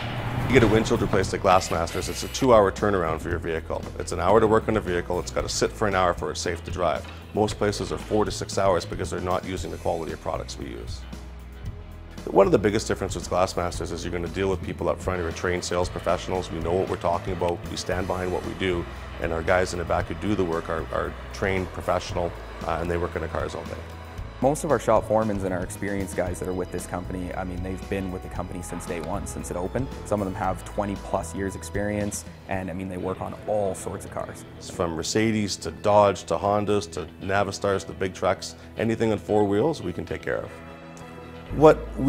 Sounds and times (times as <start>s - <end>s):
Music: 0.0s - 42.0s
Speech: 0.5s - 11.0s, 12.2s - 40.6s, 41.5s - 42.0s.